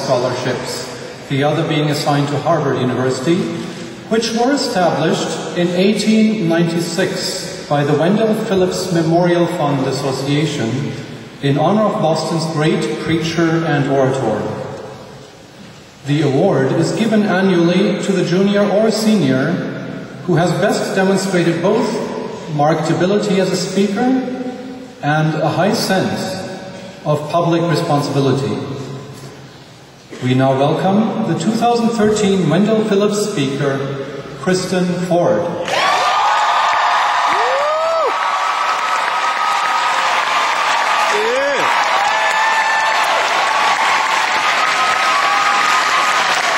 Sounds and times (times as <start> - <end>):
Male speech, man speaking: 0.0 - 14.6, 16.0 - 19.7, 20.3 - 24.3, 25.0 - 28.8, 30.2 - 35.6
Narration, monologue: 0.0 - 35.7.